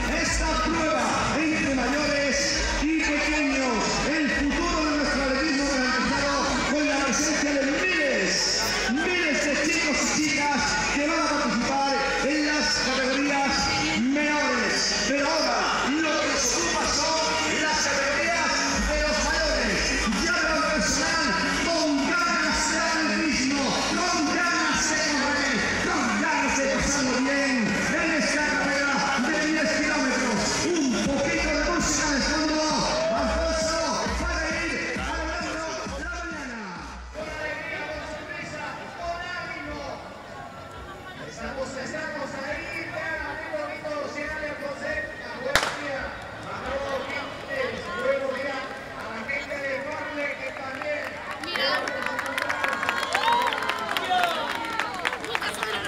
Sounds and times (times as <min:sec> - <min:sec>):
Speech: 0:00.0 - 0:52.8
Outside, urban or manmade: 0:00.0 - 0:55.8.